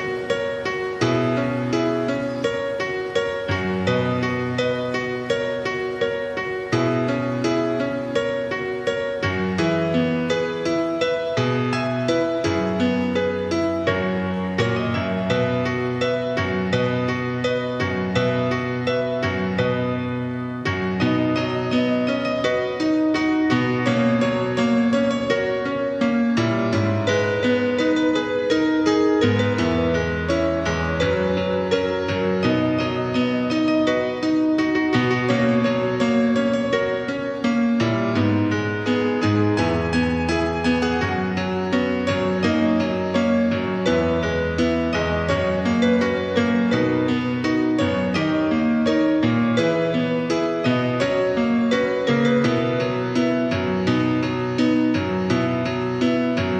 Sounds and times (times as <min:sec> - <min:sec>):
Music: 0:00.0 - 0:56.5.